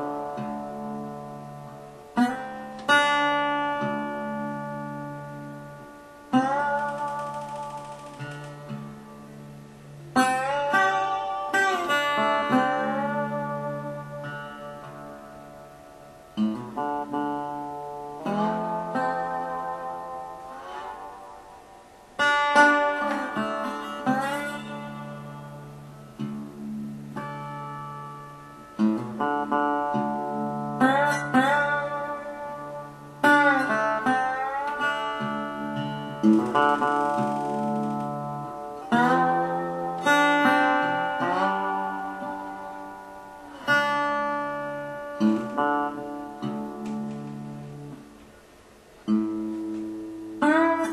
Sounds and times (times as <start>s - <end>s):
Acoustic guitar: 0.0s - 50.9s.